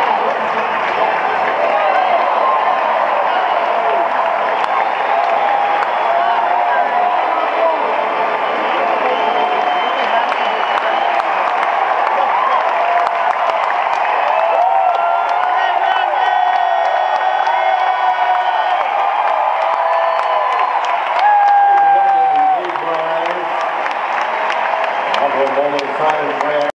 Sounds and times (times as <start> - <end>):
Speech: 7.2 - 11.2, 21.9 - 23.5, 25.2 - 26.7.